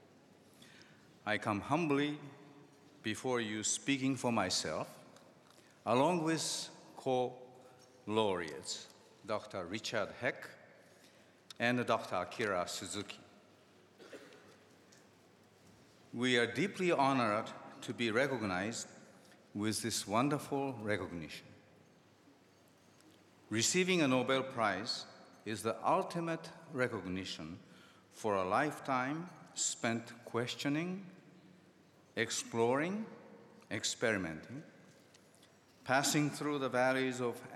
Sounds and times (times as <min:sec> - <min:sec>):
Narration, monologue: 0:00.0 - 0:37.5
Male speech, man speaking: 0:01.2 - 0:02.4, 0:03.0 - 0:05.1, 0:05.8 - 0:10.6, 0:11.5 - 0:13.3, 0:16.2 - 0:21.5, 0:23.5 - 0:27.6, 0:28.2 - 0:31.2, 0:32.2 - 0:34.7, 0:35.9 - 0:37.5.